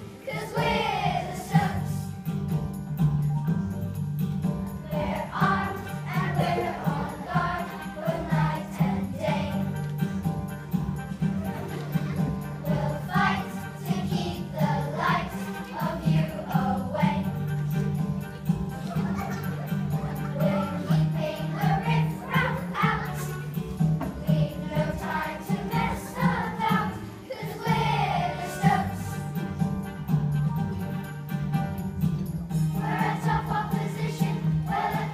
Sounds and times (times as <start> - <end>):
Music: 0.0 - 35.1.